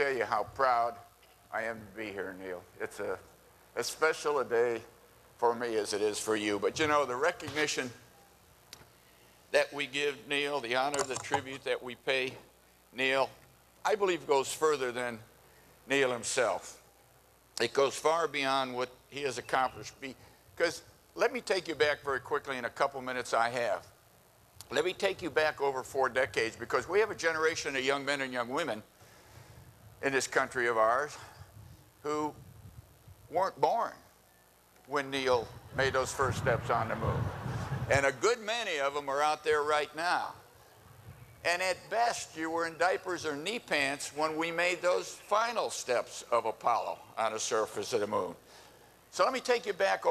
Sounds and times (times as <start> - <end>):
Male speech, man speaking: 0.0 - 8.0, 9.5 - 15.3, 15.9 - 16.8, 17.6 - 23.9, 24.7 - 28.9, 30.0 - 31.2, 32.0 - 32.4, 33.3 - 34.1, 34.9 - 37.3, 37.9 - 40.4, 41.4 - 48.4, 49.1 - 50.1
Narration, monologue: 0.0 - 50.1.